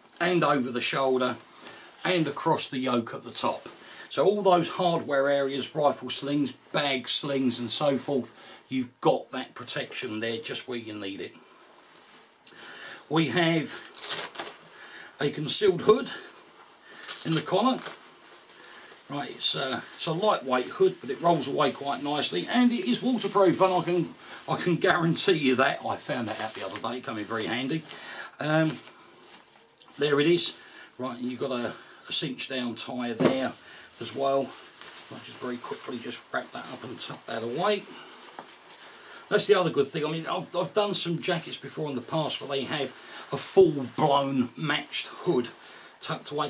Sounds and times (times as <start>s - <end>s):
Speech: 0.2s - 1.4s, 2.0s - 11.4s, 13.1s - 13.9s, 15.2s - 16.3s, 17.2s - 18.0s, 19.1s - 28.9s, 29.9s - 38.0s, 39.3s - 46.4s.